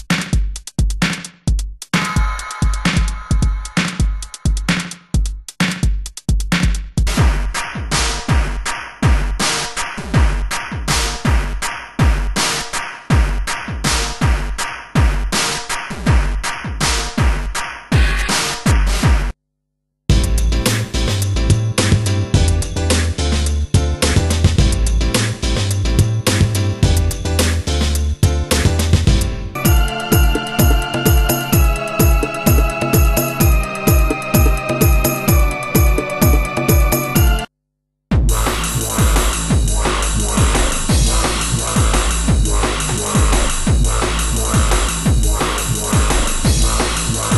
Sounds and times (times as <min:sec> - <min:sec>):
Drum machine: 0:00.0 - 0:19.4, 0:20.1 - 0:37.5, 0:38.1 - 0:47.3.